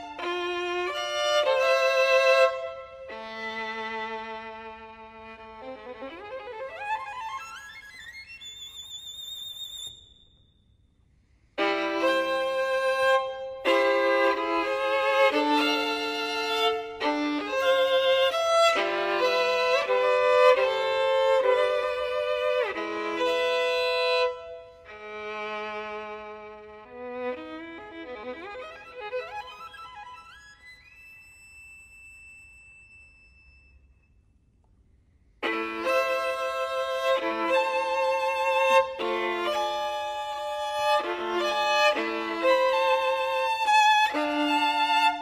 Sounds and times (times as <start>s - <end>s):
Music: 0.0s - 10.6s, 11.6s - 34.2s, 35.4s - 45.2s.